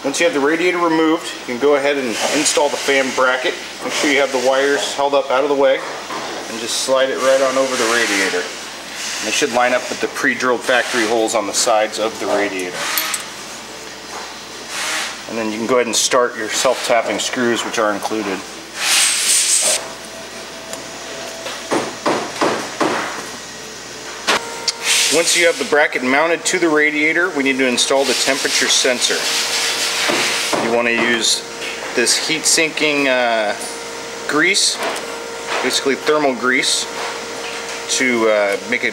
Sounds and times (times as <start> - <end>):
Speech: 0.0 - 8.6, 9.2 - 12.8, 15.3 - 18.5, 25.1 - 29.3, 30.6 - 33.6, 34.3 - 34.9, 35.6 - 37.0, 37.9 - 38.9.